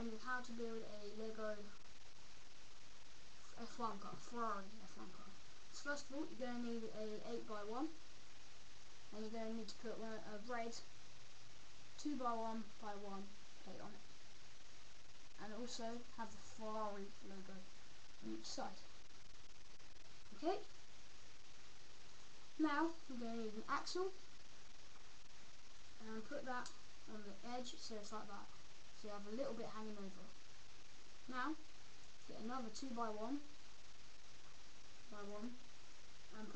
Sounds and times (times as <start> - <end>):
Speech: 0.0 - 1.8, 3.4 - 8.0, 9.1 - 10.9, 12.0 - 14.1, 15.4 - 18.9, 20.3 - 20.7, 22.6 - 24.2, 26.0 - 30.4, 31.2 - 31.6, 32.2 - 33.5, 35.1 - 35.6, 36.3 - 36.5.